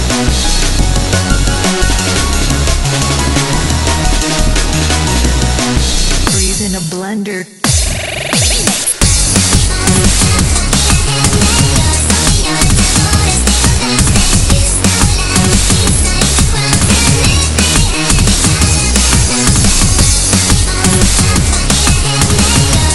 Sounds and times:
Dance music: 0.0 - 22.9
Disco: 7.6 - 22.9.

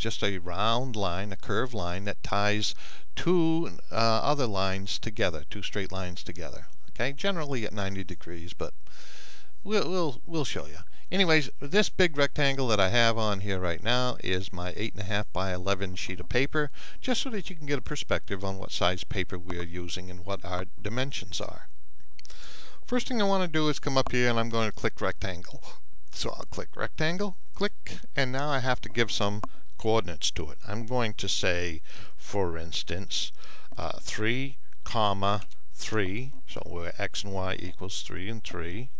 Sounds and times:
Speech: 0.0 - 8.8, 9.6 - 21.7, 22.8 - 39.0.

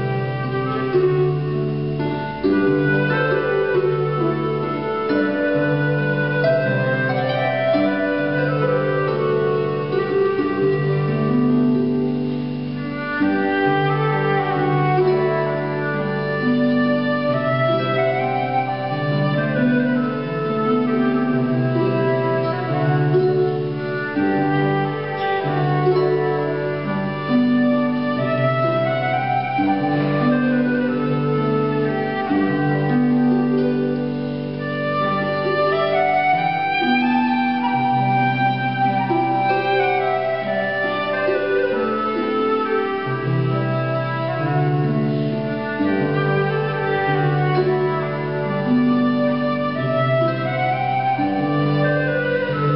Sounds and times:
Harp: 0.0 - 52.7
Pizzicato: 0.0 - 52.7.

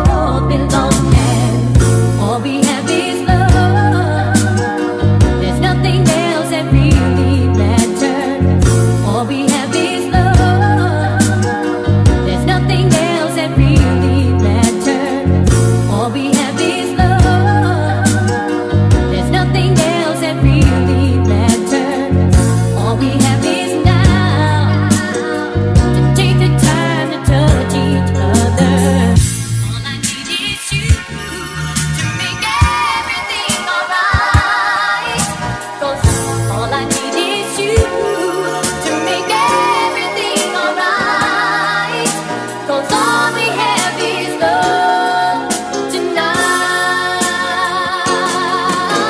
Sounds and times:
Soul music: 0.0 - 49.0.

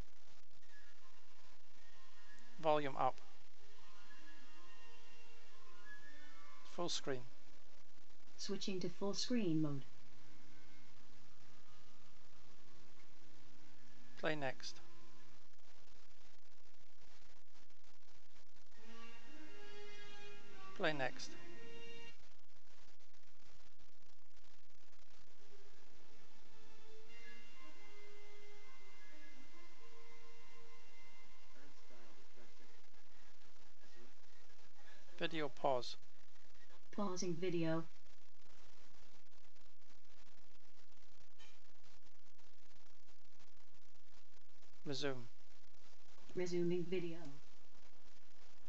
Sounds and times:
Male speech, man speaking: 2.6 - 3.2, 6.7 - 7.3, 14.2 - 14.8, 20.8 - 21.4, 35.2 - 36.0, 44.8 - 45.3.

